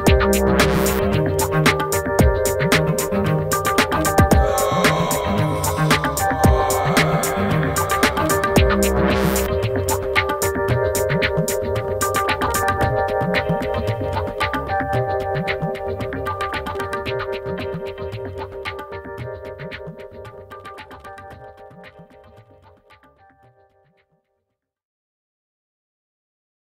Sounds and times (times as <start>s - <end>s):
Synthesizer: 0.0s - 22.8s.